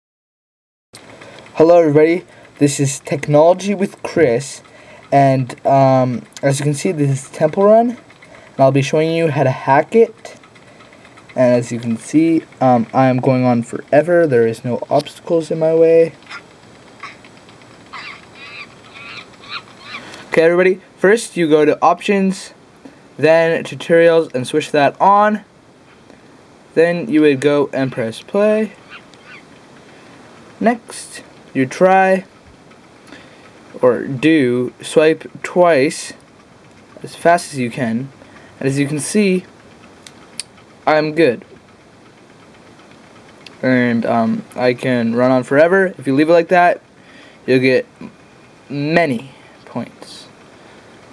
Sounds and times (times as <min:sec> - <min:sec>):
Speech: 0:01.6 - 0:08.0, 0:08.6 - 0:10.4, 0:11.4 - 0:16.2, 0:20.3 - 0:22.6, 0:23.2 - 0:25.5, 0:26.8 - 0:28.8, 0:30.6 - 0:32.3, 0:33.8 - 0:36.2, 0:37.0 - 0:39.5, 0:40.8 - 0:41.5, 0:43.6 - 0:46.8, 0:47.5 - 0:50.3.